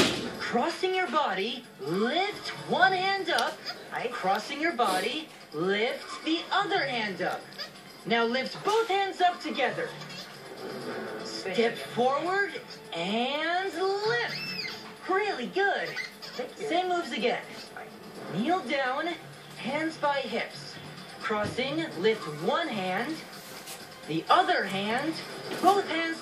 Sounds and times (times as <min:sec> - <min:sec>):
Music: 0:00.0 - 0:26.2.